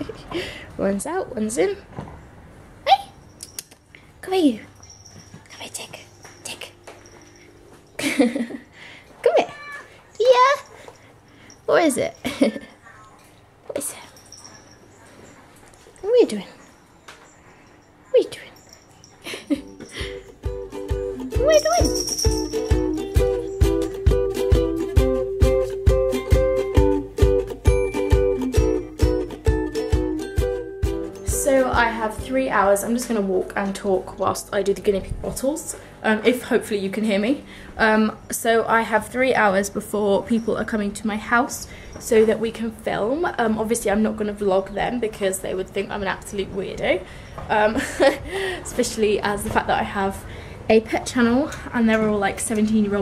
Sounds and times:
Speech: 16.0s - 16.6s, 31.3s - 47.8s, 48.7s - 53.0s.

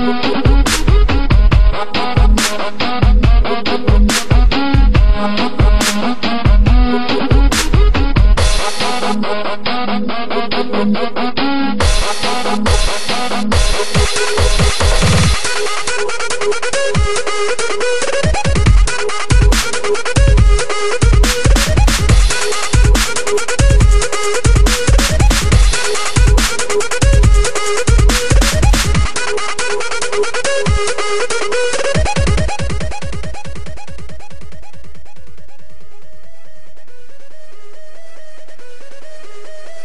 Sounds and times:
Drum and bass: 0.0s - 39.8s.

